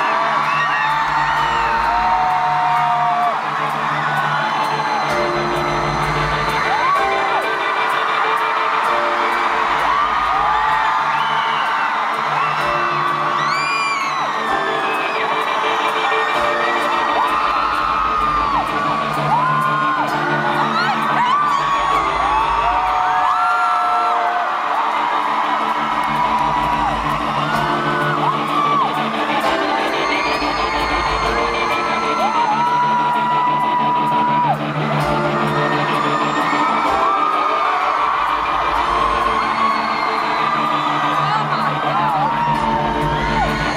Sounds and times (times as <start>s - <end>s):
Music: 0.0s - 43.7s.